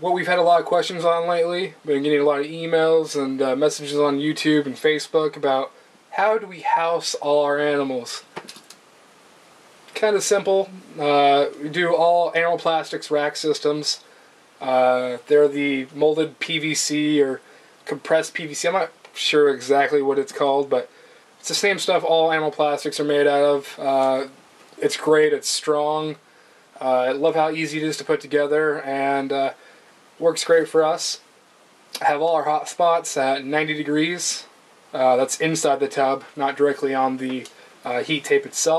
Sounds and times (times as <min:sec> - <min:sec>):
Speech: 0:00.0 - 0:08.3, 0:09.9 - 0:26.2, 0:26.8 - 0:29.6, 0:30.2 - 0:31.3, 0:32.0 - 0:38.7
Inside, small room: 0:00.0 - 0:38.7.